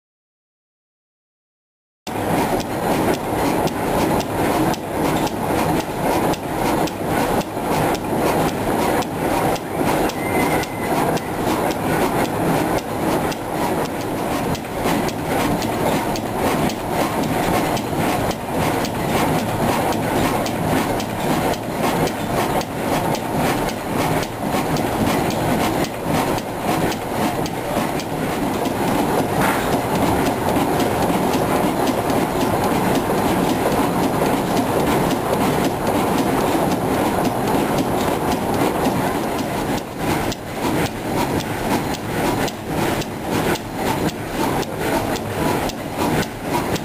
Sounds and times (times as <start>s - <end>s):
Engine: 2.1s - 46.8s.